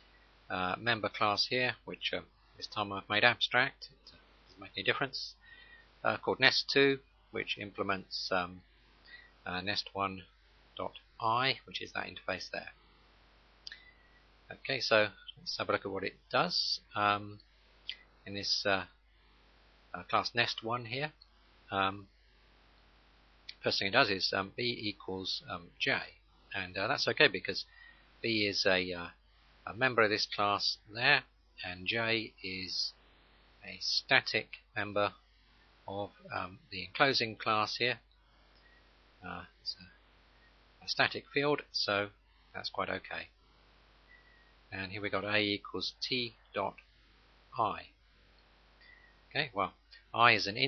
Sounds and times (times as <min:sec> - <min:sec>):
Speech: 0:00.5 - 0:05.4, 0:06.0 - 0:08.6, 0:09.4 - 0:12.8, 0:14.5 - 0:17.4, 0:18.2 - 0:19.0, 0:20.0 - 0:22.1, 0:23.5 - 0:33.0, 0:33.6 - 0:35.2, 0:35.9 - 0:38.0, 0:39.2 - 0:39.9, 0:40.8 - 0:43.3, 0:44.7 - 0:46.8, 0:47.6 - 0:47.9, 0:49.4 - 0:50.6.